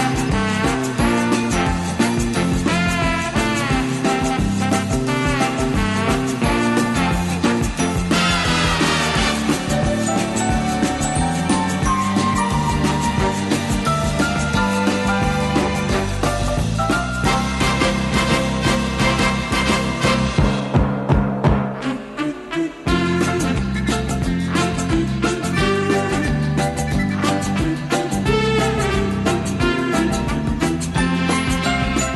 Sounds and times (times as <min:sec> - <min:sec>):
Orchestra: 0:00.0 - 0:32.1.